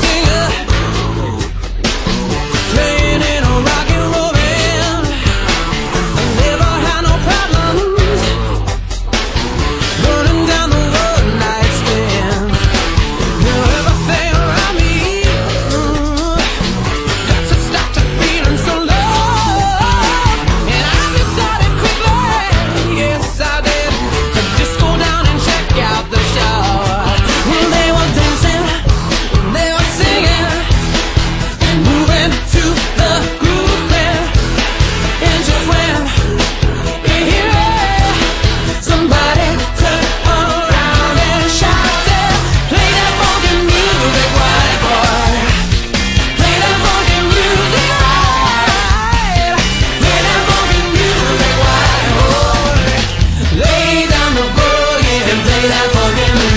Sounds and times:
Music: 0:00.0 - 0:56.5.

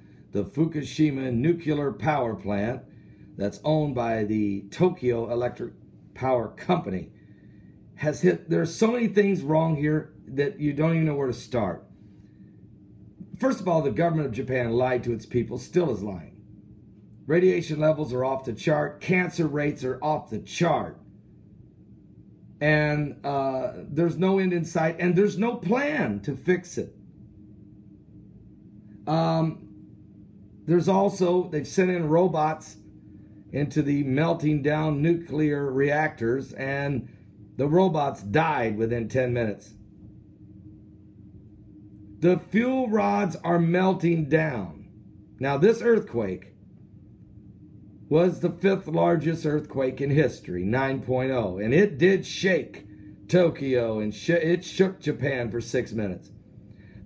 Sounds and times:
Speech: 0:00.4 - 0:07.1, 0:08.0 - 0:11.9, 0:13.3 - 0:16.4, 0:17.3 - 0:21.0, 0:22.6 - 0:26.9, 0:29.1 - 0:29.6, 0:30.7 - 0:32.8, 0:33.5 - 0:39.8, 0:42.2 - 0:46.5, 0:48.1 - 0:56.3.

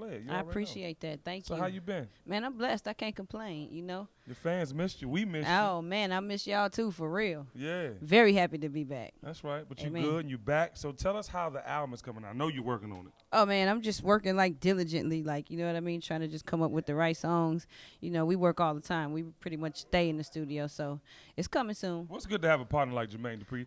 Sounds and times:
Speech: 0:07.6 - 0:08.0, 0:09.4 - 0:13.1.

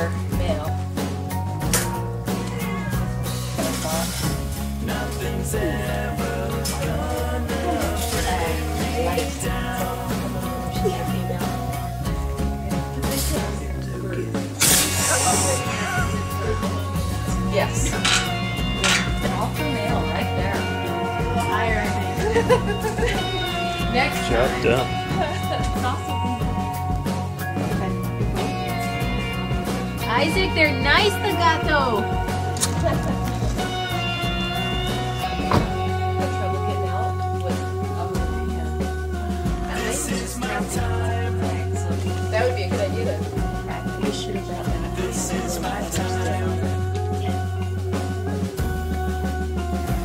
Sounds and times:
Music: 0:00.0 - 0:50.0
Speech: 0:13.0 - 0:18.1, 0:39.7 - 0:47.5.

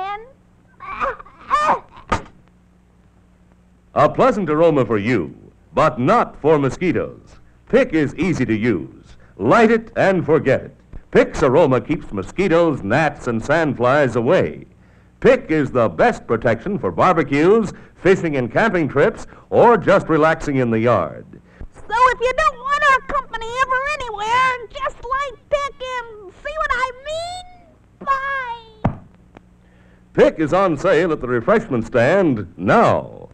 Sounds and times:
Speech: 0:04.0 - 0:28.8, 0:30.2 - 0:33.3.

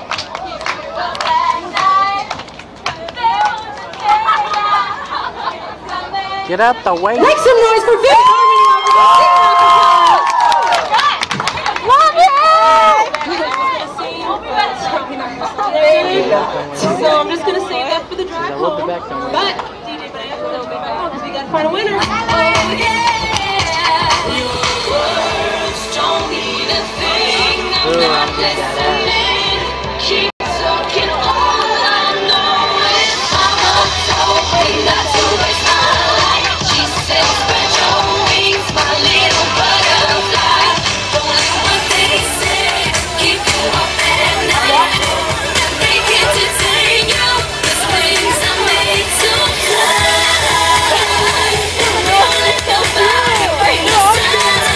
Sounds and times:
Female singing: 0:00.4 - 0:06.6, 0:19.4 - 0:54.7
Music: 0:21.5 - 0:54.7.

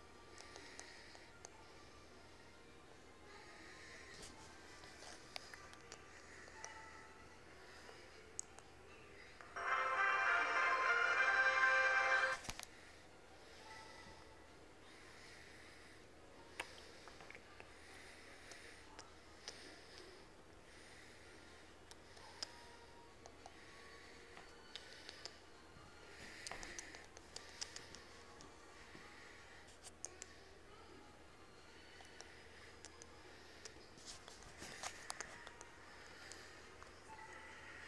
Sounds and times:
Music: 0:00.0 - 0:37.8
Television: 0:00.0 - 0:37.8.

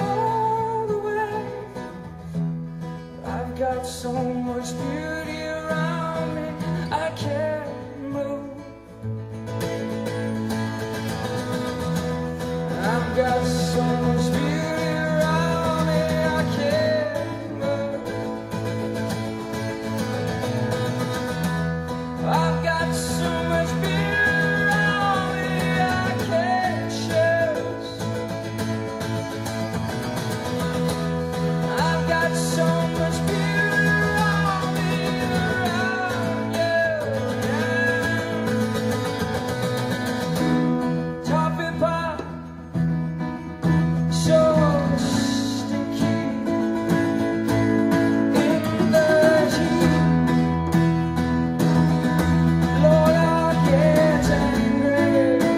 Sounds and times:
Music: 0:00.0 - 0:55.5
Singing: 0:22.2 - 0:28.0, 0:31.6 - 0:38.8, 0:52.8 - 0:55.5.

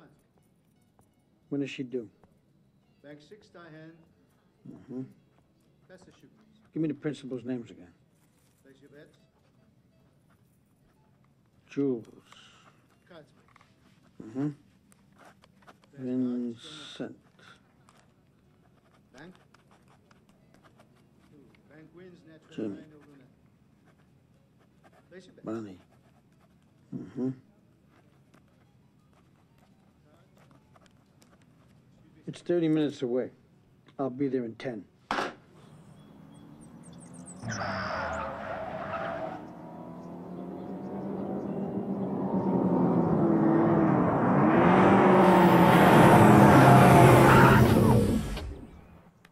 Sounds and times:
Car: 0:35.4 - 0:49.2.

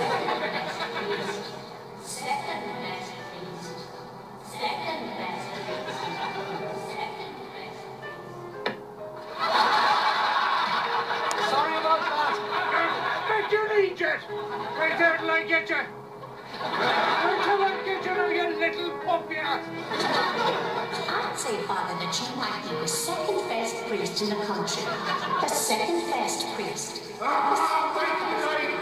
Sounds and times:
Music: 0:00.0 - 0:28.8.

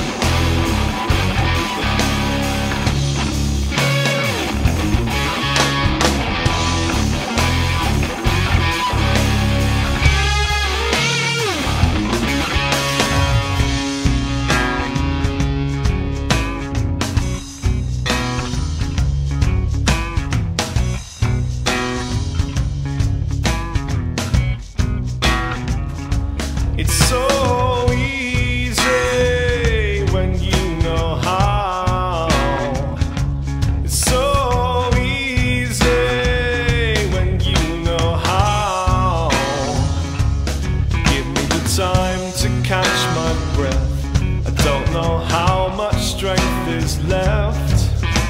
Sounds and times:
Music: 0:00.0 - 0:48.2.

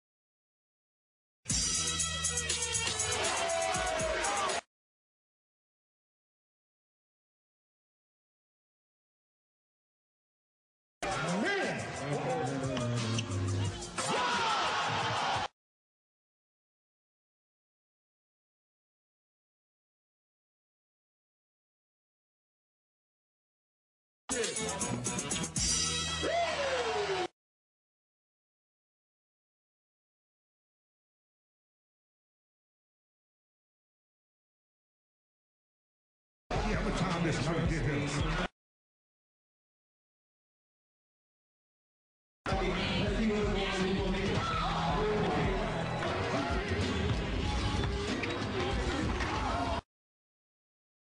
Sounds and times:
Speech: 0:11.0 - 0:13.0, 0:36.5 - 0:38.5, 0:42.5 - 0:46.9.

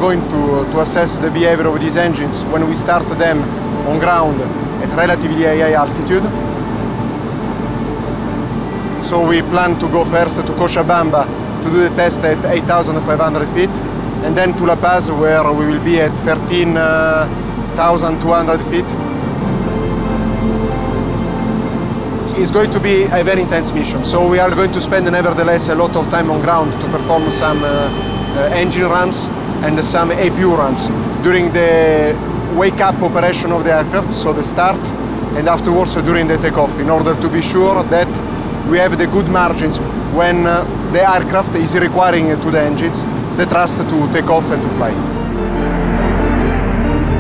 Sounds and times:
Speech: 0:00.0 - 0:06.3, 0:09.0 - 0:19.0, 0:22.3 - 0:45.0
Music: 0:00.0 - 0:47.2.

